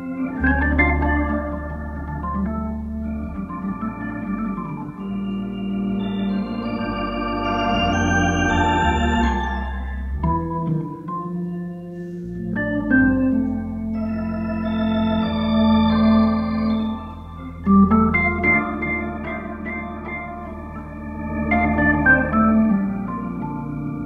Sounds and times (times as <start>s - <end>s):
Electronic organ: 0.0s - 24.0s.